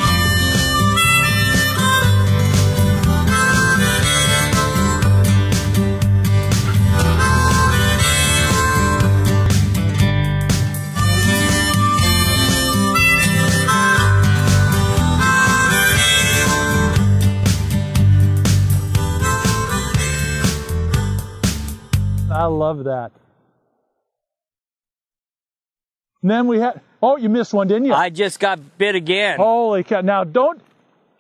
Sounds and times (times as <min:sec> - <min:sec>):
Music: 0:00.0 - 0:22.8.